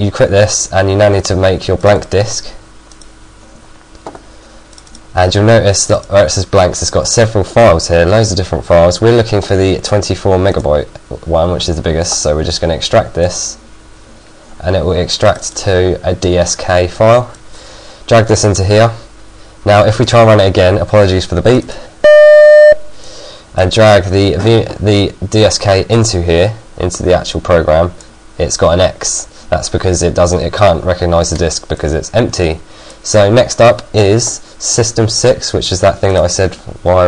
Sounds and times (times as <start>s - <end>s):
Speech: 0.0s - 2.6s, 5.2s - 13.6s, 14.6s - 17.4s, 18.1s - 21.9s, 23.6s - 37.0s.